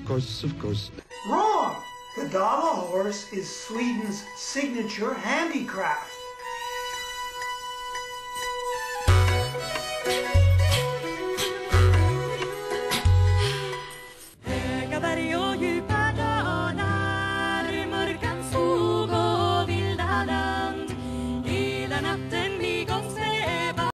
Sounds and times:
Music: 0.0s - 23.9s.

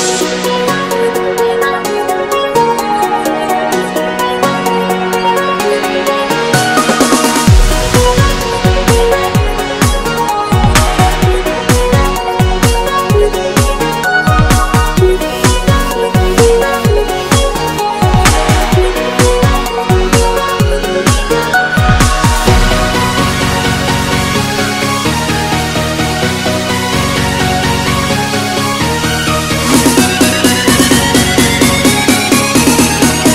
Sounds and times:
Music: 0.0s - 33.3s.

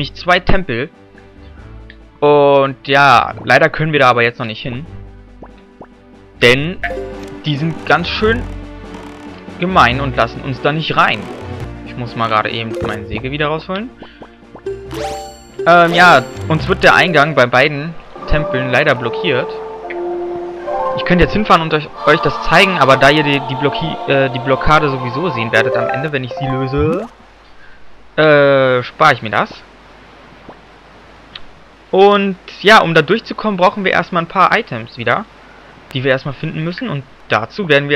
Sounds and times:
Speech: 0.0s - 0.9s, 2.2s - 4.9s, 6.4s - 8.5s, 9.6s - 11.3s, 11.9s - 13.9s, 15.7s - 19.6s, 21.0s - 27.1s, 28.2s - 29.6s, 32.0s - 35.3s, 35.9s - 37.9s
Music: 0.0s - 27.2s.

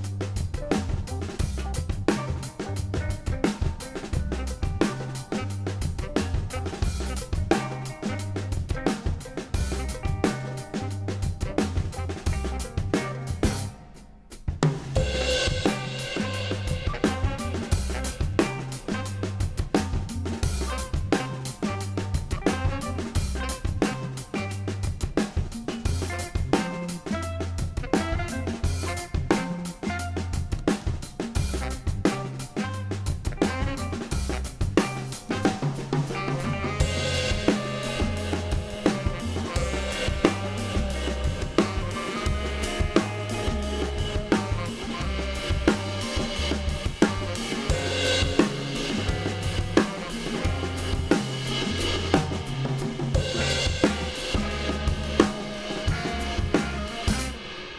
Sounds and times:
Drum: 0.0s - 57.7s
Drum kit: 0.0s - 57.7s
Cymbal: 14.8s - 22.2s, 34.1s - 57.7s.

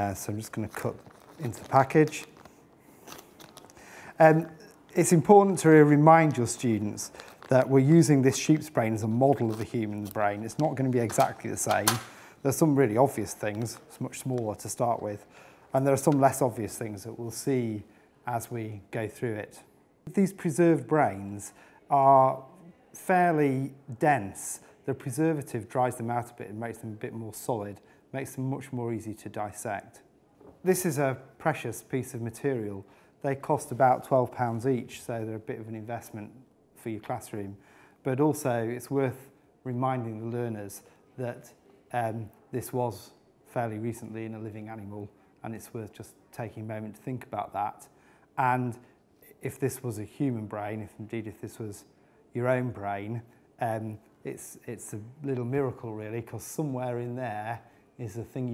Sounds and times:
Speech: 0.0s - 2.3s, 4.2s - 58.5s.

